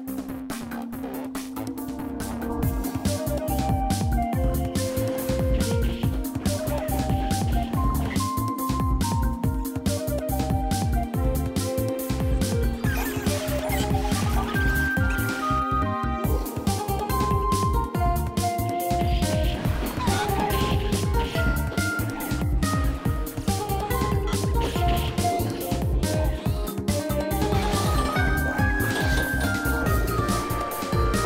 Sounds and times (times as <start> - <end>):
Music: 0.0 - 31.2.